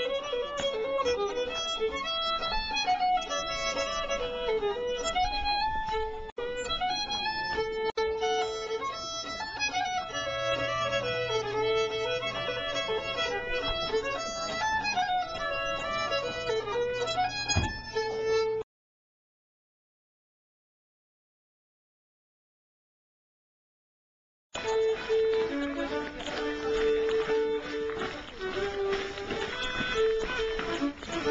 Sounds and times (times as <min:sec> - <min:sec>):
Folk music: 0:00.0 - 0:18.6, 0:24.6 - 0:31.3.